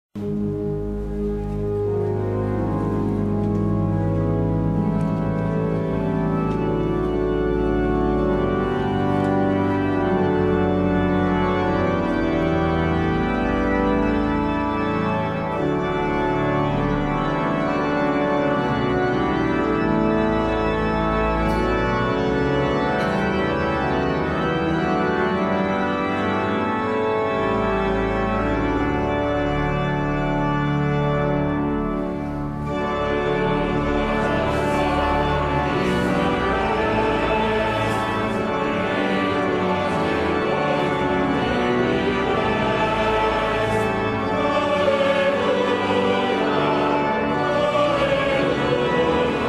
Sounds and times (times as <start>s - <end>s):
Keyboard (musical): 0.2s - 49.4s.